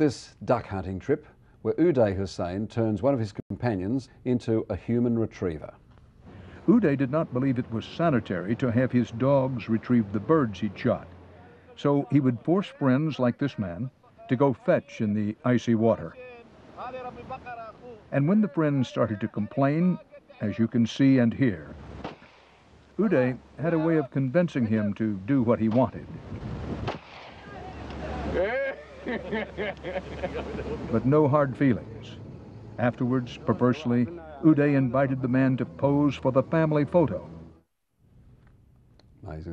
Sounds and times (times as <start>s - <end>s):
Speech: 0.0s - 5.8s, 6.7s - 21.8s, 23.0s - 26.2s, 30.9s - 32.2s, 32.8s - 37.3s, 39.2s - 39.5s.